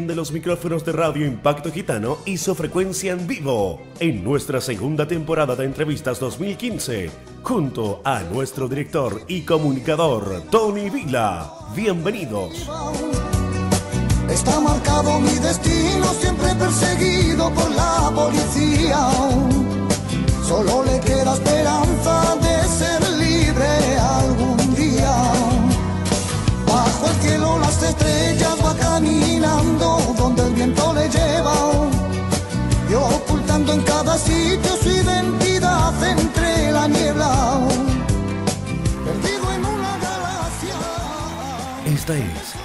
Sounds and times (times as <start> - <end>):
Speech: 0.0 - 12.8, 41.8 - 42.6
Music: 0.0 - 42.6.